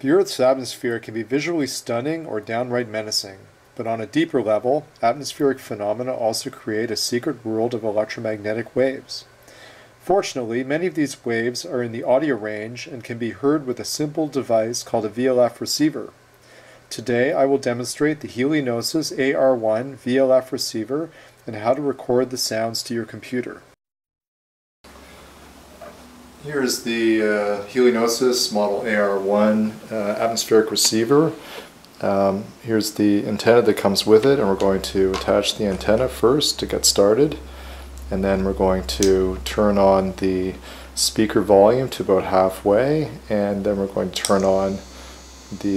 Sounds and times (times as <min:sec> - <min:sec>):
Speech: 0:00.0 - 0:09.3, 0:10.0 - 0:16.2, 0:16.9 - 0:23.8, 0:26.4 - 0:31.4, 0:32.0 - 0:37.5, 0:38.1 - 0:44.9, 0:45.5 - 0:45.7.